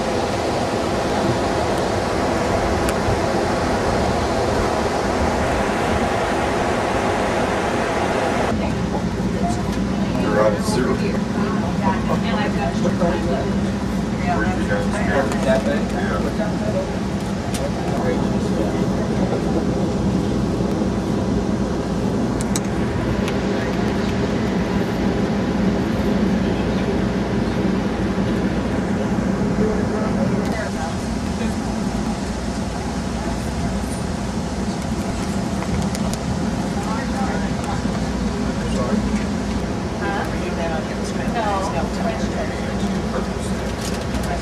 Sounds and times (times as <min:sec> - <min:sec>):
Vehicle: 0:00.0 - 0:44.4
Speech: 0:08.5 - 0:20.0, 0:28.3 - 0:31.7, 0:36.7 - 0:39.4, 0:40.0 - 0:44.4.